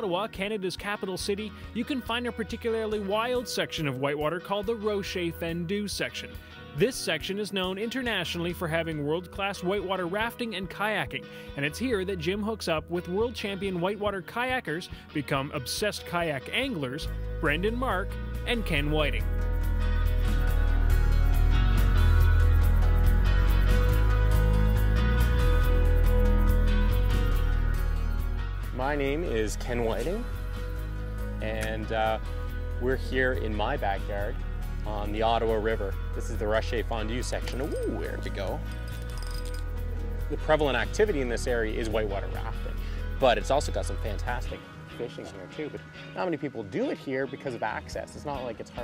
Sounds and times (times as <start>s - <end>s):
Speech: 0.0s - 19.2s, 28.8s - 30.3s, 31.4s - 32.2s, 32.8s - 38.6s, 40.3s - 48.8s
Music: 0.0s - 48.8s.